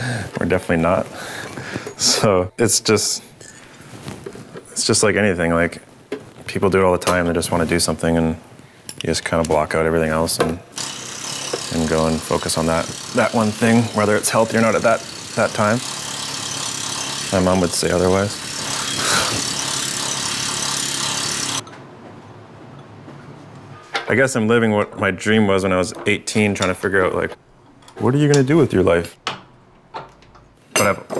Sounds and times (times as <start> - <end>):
Speech: 4.8 - 5.8, 6.5 - 8.4, 9.0 - 10.6, 11.7 - 15.8, 17.3 - 18.4, 24.1 - 27.4, 28.0 - 29.2, 30.8 - 31.1.